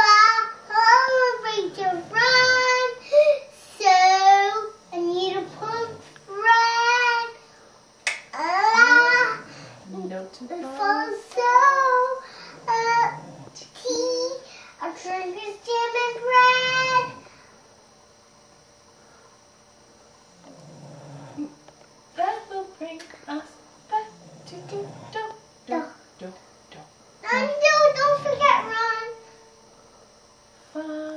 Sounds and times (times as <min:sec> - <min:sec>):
Speech: 0:08.7 - 0:11.2, 0:22.2 - 0:29.1.